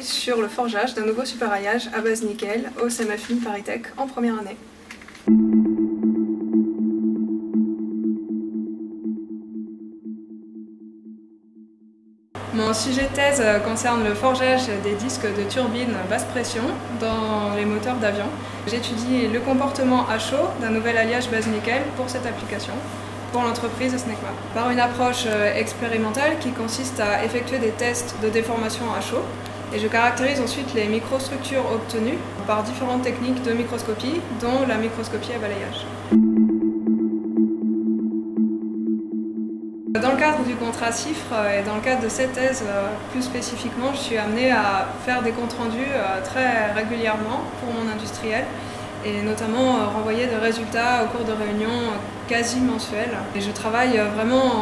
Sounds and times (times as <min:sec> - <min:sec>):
Speech: 0:00.0 - 0:04.6, 0:12.5 - 0:35.9, 0:40.0 - 0:54.6.